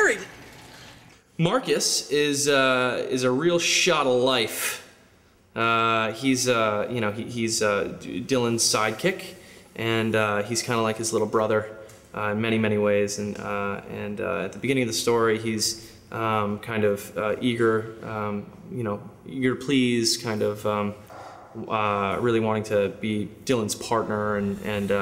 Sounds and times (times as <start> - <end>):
Speech: 0.0 - 0.3, 1.4 - 4.9, 5.6 - 21.0, 21.6 - 25.0.